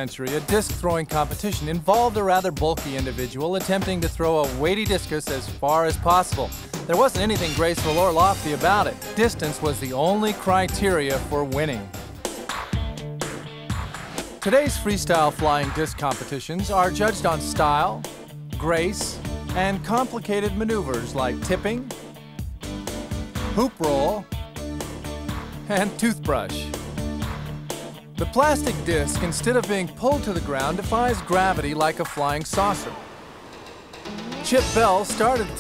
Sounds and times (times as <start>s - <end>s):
Speech: 0.0s - 11.9s, 14.4s - 18.0s, 18.6s - 21.9s, 23.6s - 24.3s, 25.7s - 26.7s, 28.2s - 33.0s, 34.4s - 35.6s
Music: 0.0s - 35.6s.